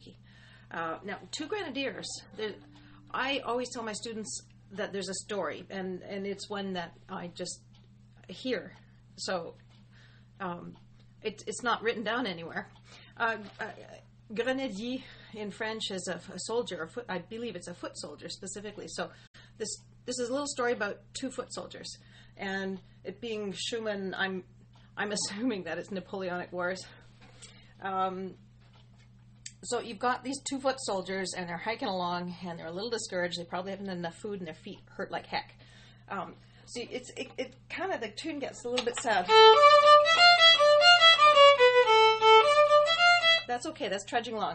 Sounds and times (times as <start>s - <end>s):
Speech: 0.0s - 7.7s, 8.3s - 9.6s, 10.4s - 27.0s, 27.8s - 28.4s, 29.5s - 39.3s, 43.5s - 44.5s.